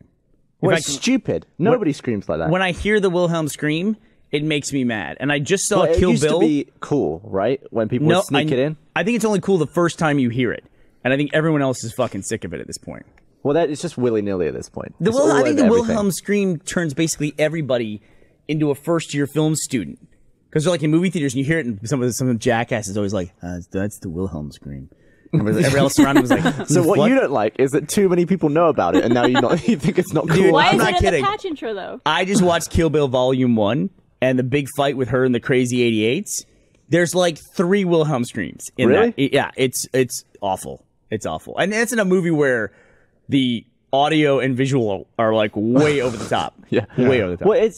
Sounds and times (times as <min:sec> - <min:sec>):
Speech: 0:00.6 - 0:42.7, 0:43.3 - 0:47.7.